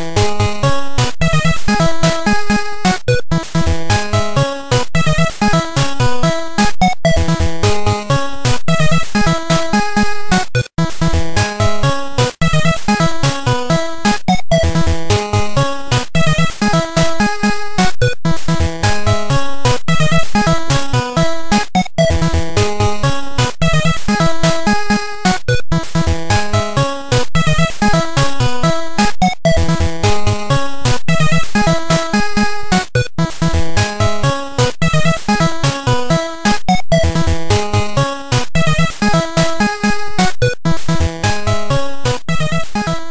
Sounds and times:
Music: 0:00.0 - 0:43.1.

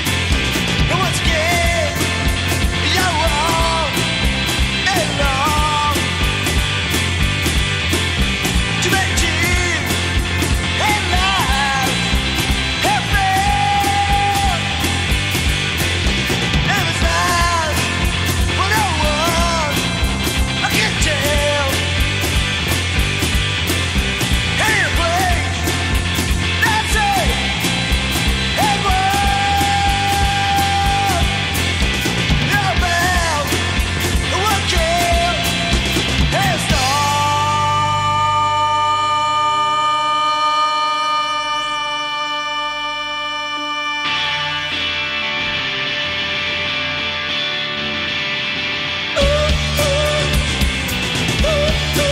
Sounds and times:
Psychedelic rock: 0:00.0 - 0:52.1.

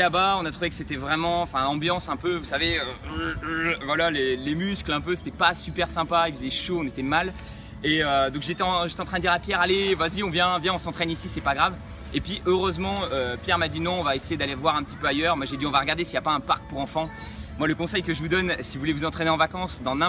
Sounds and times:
Speech: 0:00.0 - 0:20.0.

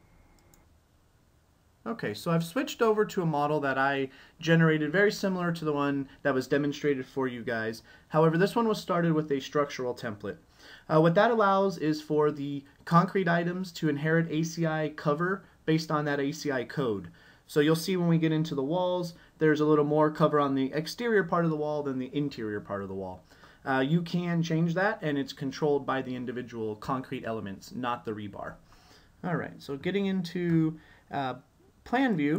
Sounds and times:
Speech: 0:01.8 - 0:28.6, 0:29.2 - 0:32.3.

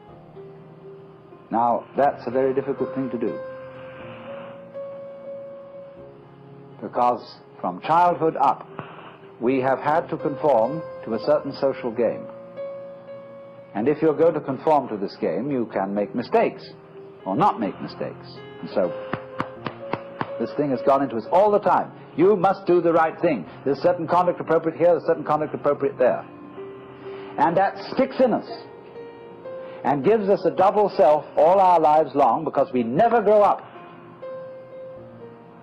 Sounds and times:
Music: 0:00.0 - 0:35.6
Speech: 0:06.8 - 0:08.6, 0:13.8 - 0:16.7, 0:17.3 - 0:18.9, 0:20.4 - 0:26.2, 0:27.4 - 0:28.7, 0:29.9 - 0:33.6.

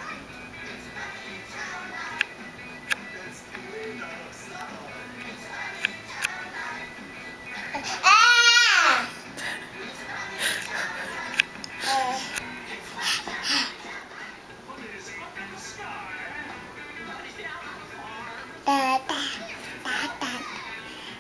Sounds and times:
Music: 0:00.0 - 0:21.2
Child speech, kid speaking: 0:18.7 - 0:20.9.

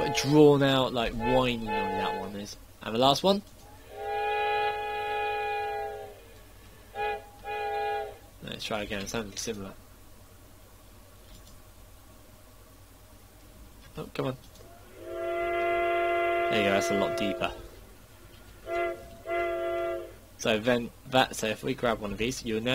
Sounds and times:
Train: 0:00.0 - 0:02.4, 0:03.7 - 0:10.1, 0:14.7 - 0:22.7
Speech: 0:00.0 - 0:03.4, 0:08.4 - 0:09.8, 0:13.9 - 0:14.4, 0:16.5 - 0:17.6, 0:20.4 - 0:22.7.

